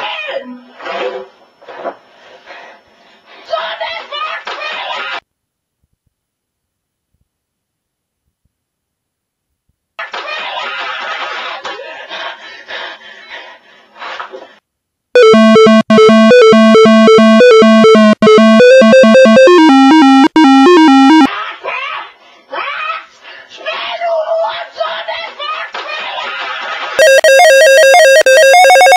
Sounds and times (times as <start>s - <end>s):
Electronic music: 15.2s - 21.3s.